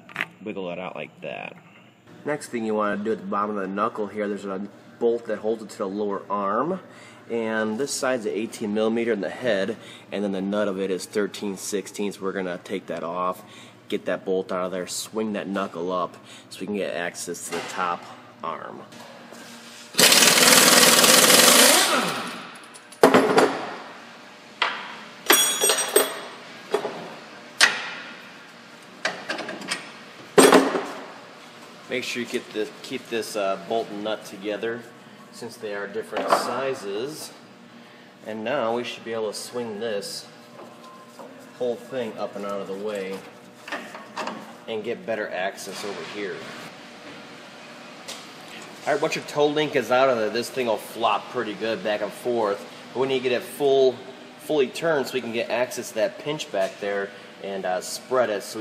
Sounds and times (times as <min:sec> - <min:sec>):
Speech: 0:00.4 - 0:01.6, 0:02.2 - 0:18.9, 0:31.9 - 0:37.4, 0:38.3 - 0:40.4, 0:41.6 - 0:43.3, 0:44.7 - 0:46.5, 0:48.8 - 0:58.6.